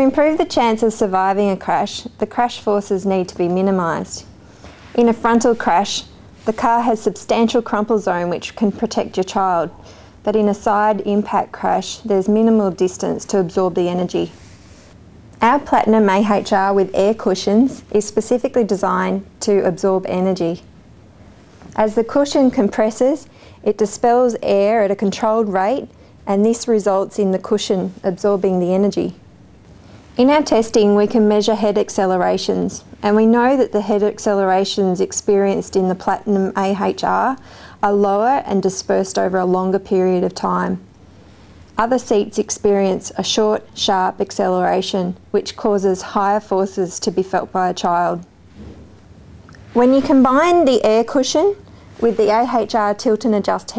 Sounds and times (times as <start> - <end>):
Speech: 0.0 - 4.3, 5.0 - 14.4, 15.4 - 20.6, 21.8 - 29.2, 30.2 - 40.8, 41.8 - 48.3, 49.8 - 53.7.